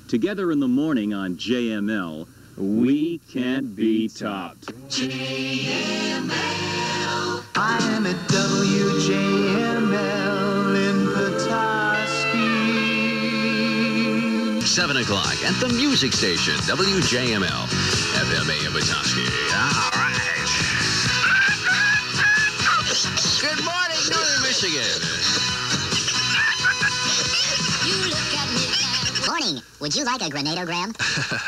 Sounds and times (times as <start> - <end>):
Music: 4.9 - 29.4.